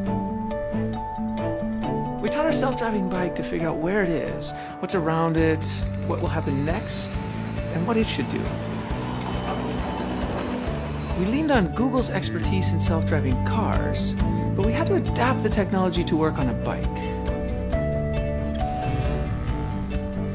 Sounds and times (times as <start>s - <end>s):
Music: 0.0s - 20.3s
Speech: 2.2s - 7.1s, 7.7s - 8.5s, 11.2s - 17.1s
Vehicle: 8.0s - 11.3s.